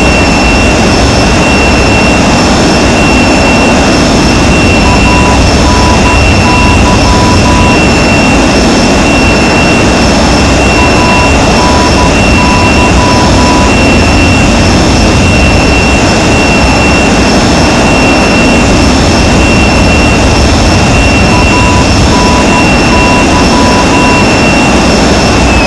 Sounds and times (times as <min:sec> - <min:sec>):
Jet engine: 0:00.0 - 0:25.6.